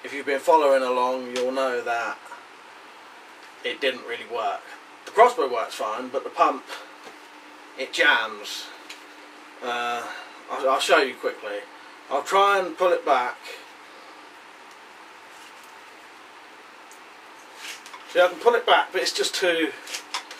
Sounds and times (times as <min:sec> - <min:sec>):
Speech: 0:00.0 - 0:02.4, 0:03.6 - 0:06.9, 0:07.8 - 0:08.8, 0:09.6 - 0:13.7, 0:18.1 - 0:19.9.